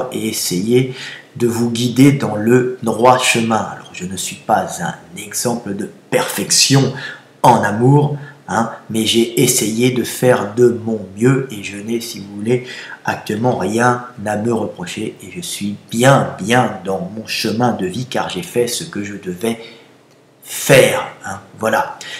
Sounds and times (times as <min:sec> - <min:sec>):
Speech: 0:00.0 - 0:19.7, 0:20.4 - 0:22.0.